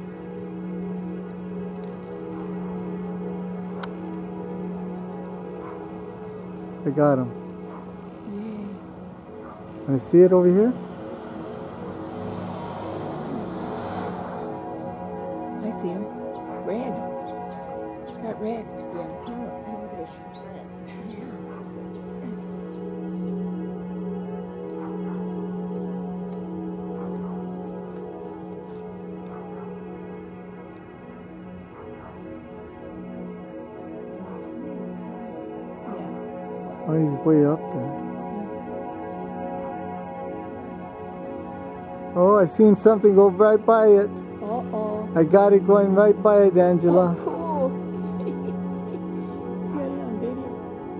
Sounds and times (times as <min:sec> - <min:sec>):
Music: 0:00.0 - 0:50.9.